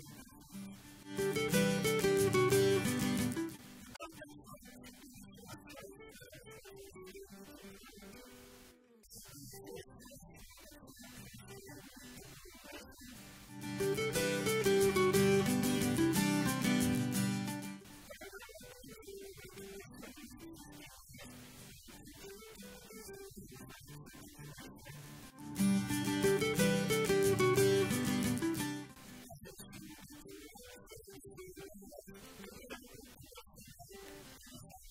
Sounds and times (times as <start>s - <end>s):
Speech: 0.0s - 0.7s, 3.9s - 13.2s, 18.0s - 25.3s, 29.1s - 34.9s
Music: 0.0s - 34.9s.